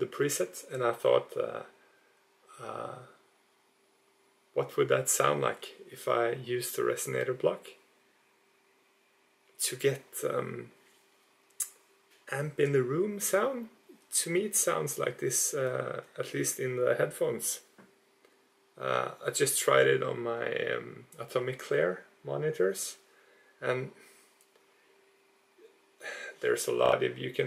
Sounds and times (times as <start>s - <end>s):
Speech: 0.0s - 1.8s, 2.5s - 3.2s, 4.5s - 7.9s, 9.6s - 10.8s, 11.6s - 17.8s, 18.8s - 23.0s, 23.6s - 24.1s, 26.0s - 27.4s.